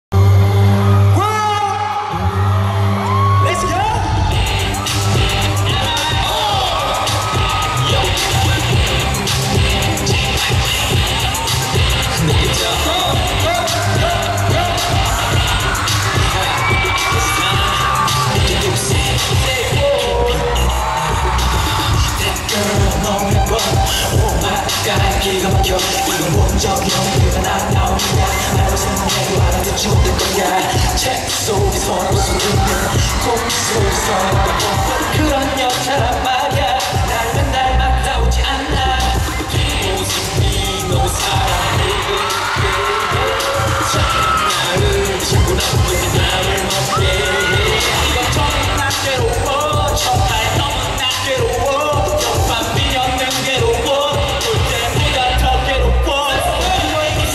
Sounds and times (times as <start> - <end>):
Pop music: 0.1 - 57.3.